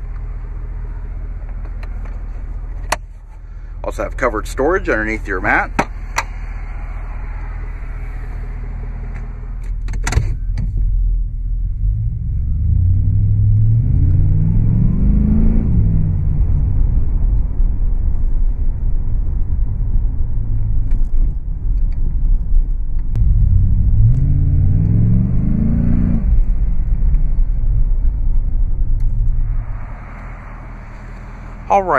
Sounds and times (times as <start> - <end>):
Car: 0.0 - 31.9
Rumble: 0.0 - 31.9.